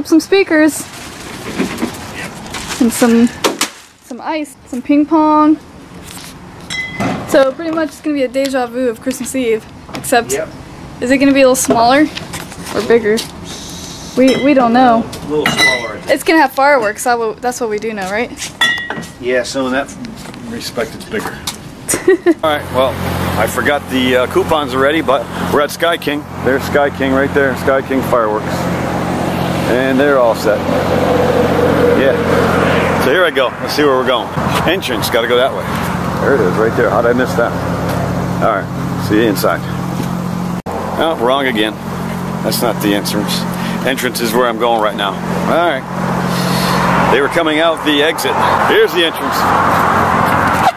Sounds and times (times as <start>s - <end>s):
Outside, urban or manmade: 0.0s - 50.7s
Speech: 47.1s - 49.5s.